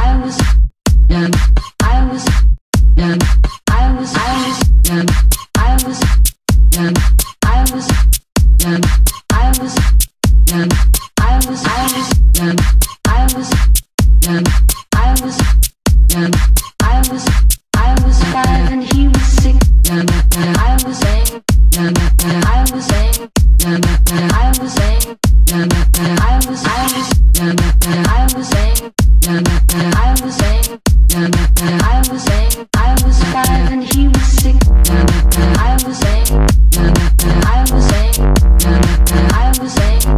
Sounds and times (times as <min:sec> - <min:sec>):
Music: 0:00.3 - 0:40.1.